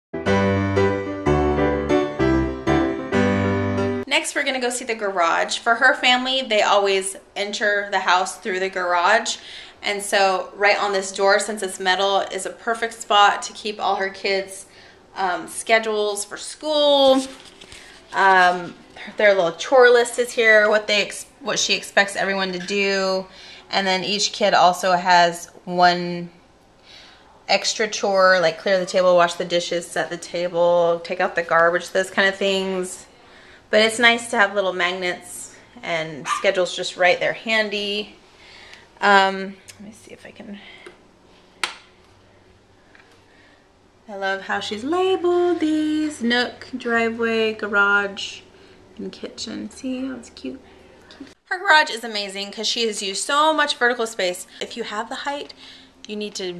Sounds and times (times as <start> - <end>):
Music: 0.2 - 4.1
Speech: 4.1 - 17.4, 18.1 - 26.4, 27.5 - 33.1, 33.7 - 38.2, 39.0 - 40.8, 44.1 - 48.4, 49.0 - 56.5.